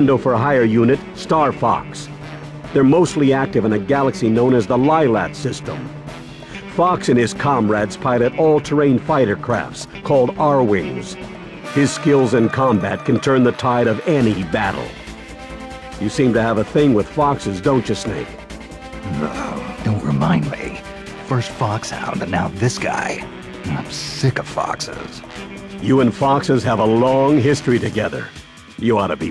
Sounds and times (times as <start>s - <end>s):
Speech: 0.0s - 2.1s, 2.8s - 5.9s, 6.7s - 15.0s, 16.0s - 18.3s, 19.0s - 25.2s, 25.8s - 29.3s
Music: 0.0s - 29.3s.